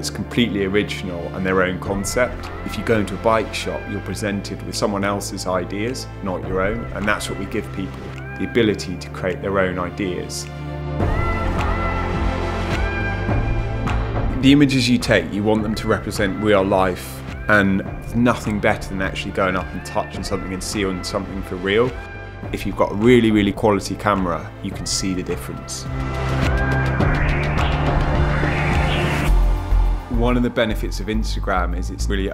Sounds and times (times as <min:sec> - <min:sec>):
Speech: 0:00.0 - 0:10.5, 0:14.4 - 0:25.9, 0:30.1 - 0:32.3
Music: 0:00.0 - 0:32.3.